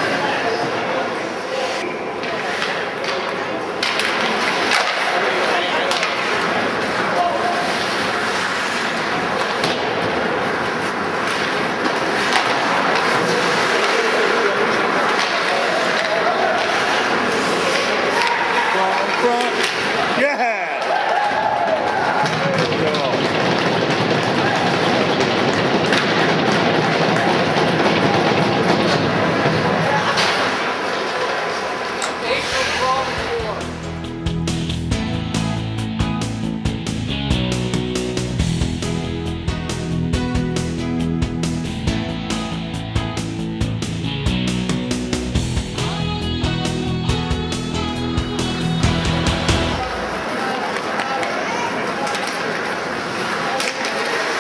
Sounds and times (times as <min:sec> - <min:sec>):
Male speech, man speaking: 0:00.0 - 0:01.9, 0:05.0 - 0:06.4, 0:07.0 - 0:07.7, 0:13.2 - 0:16.5, 0:18.4 - 0:20.9, 0:22.3 - 0:23.3, 0:32.1 - 0:33.7.